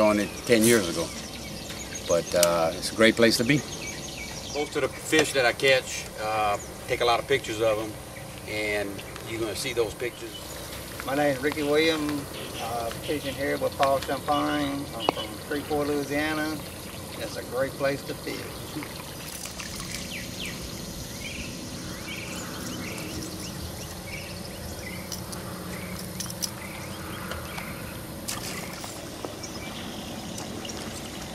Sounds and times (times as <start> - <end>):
Insect: 0.0 - 31.3.